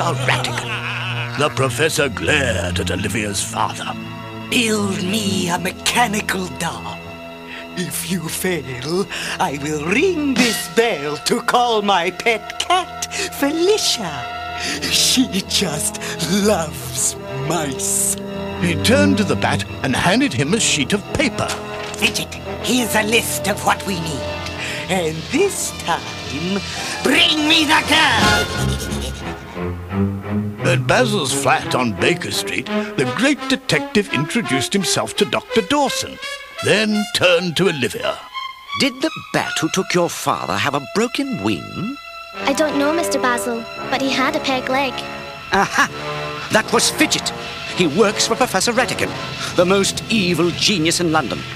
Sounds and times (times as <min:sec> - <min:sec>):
Speech: 0:00.0 - 0:07.0, 0:07.8 - 0:24.2, 0:24.9 - 0:28.4, 0:30.6 - 0:38.2, 0:38.8 - 0:45.0, 0:46.5 - 0:51.5
Music: 0:00.0 - 0:51.5.